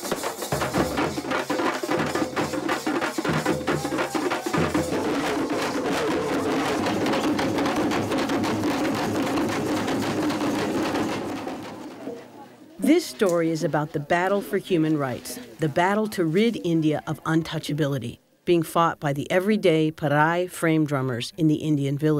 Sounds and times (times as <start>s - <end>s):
Drum: 0.0s - 12.3s
Speech: 12.1s - 22.1s.